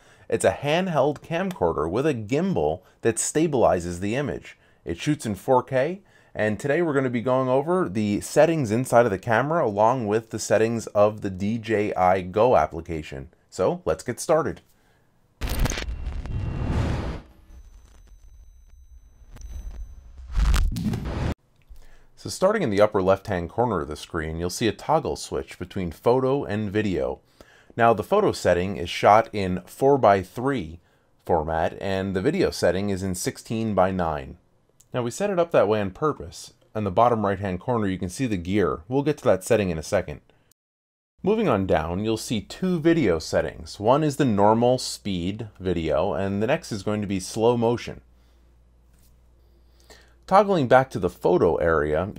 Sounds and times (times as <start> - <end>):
Speech: 0.3 - 14.6, 22.2 - 27.2, 27.8 - 40.2, 41.2 - 48.0, 50.3 - 52.1.